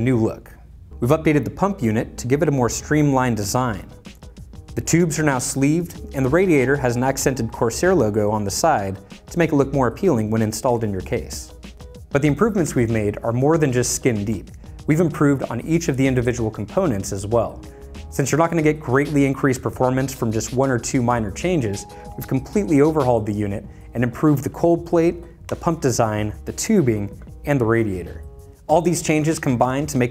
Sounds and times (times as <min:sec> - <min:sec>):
Speech: 0:00.0 - 0:04.0, 0:04.8 - 0:11.5, 0:12.1 - 0:30.1
Music: 0:00.0 - 0:30.1.